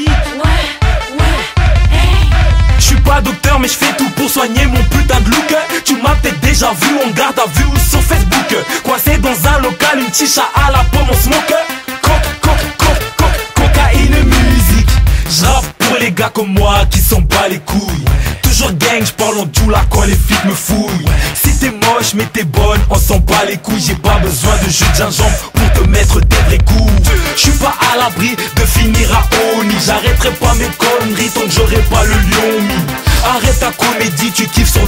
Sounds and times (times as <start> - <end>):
Music: 0.0 - 34.8.